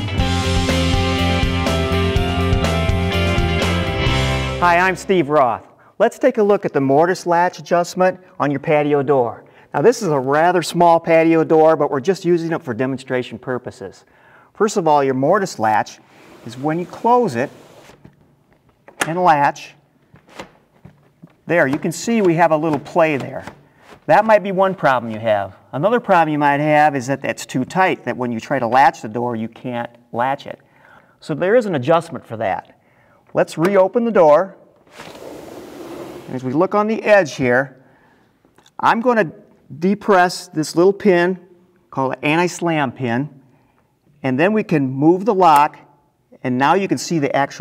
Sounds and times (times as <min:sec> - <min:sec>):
Speech: 0:04.6 - 0:17.5, 0:19.0 - 0:19.8, 0:21.5 - 0:23.5, 0:24.1 - 0:30.6, 0:31.2 - 0:32.8, 0:33.4 - 0:34.6, 0:36.3 - 0:37.8, 0:38.8 - 0:43.4, 0:44.2 - 0:47.6
Sliding door: 0:16.1 - 0:18.0, 0:34.9 - 0:36.5.